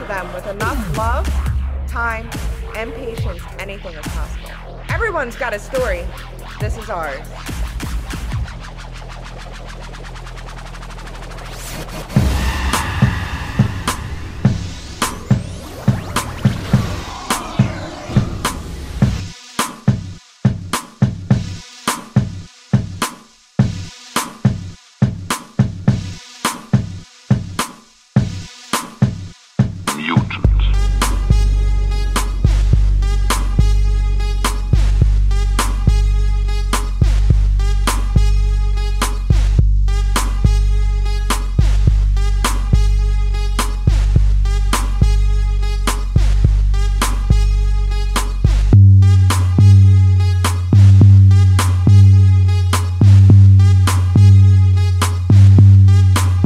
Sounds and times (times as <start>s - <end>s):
Speech: 0.0s - 1.3s, 1.9s - 7.2s, 29.9s - 30.9s
Music: 0.0s - 56.4s.